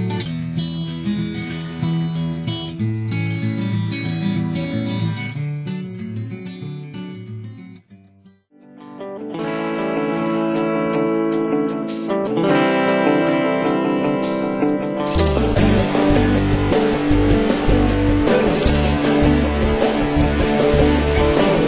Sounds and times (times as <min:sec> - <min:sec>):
Music: 0:00.0 - 0:21.6.